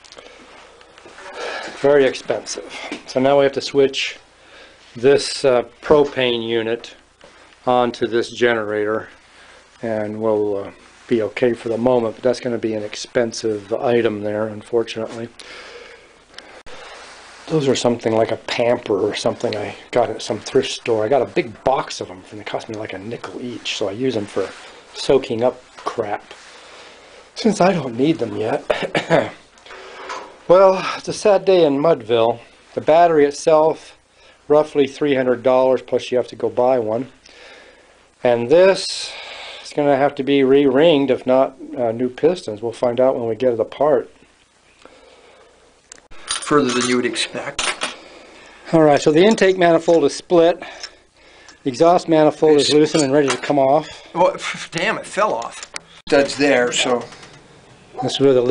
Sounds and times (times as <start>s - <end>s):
Speech: 1.7s - 4.2s, 5.0s - 7.0s, 7.6s - 9.2s, 9.8s - 15.4s, 17.5s - 26.3s, 27.4s - 29.4s, 30.5s - 37.2s, 38.2s - 44.2s, 46.4s - 47.6s, 48.7s - 50.8s, 51.6s - 57.2s, 58.0s - 58.5s.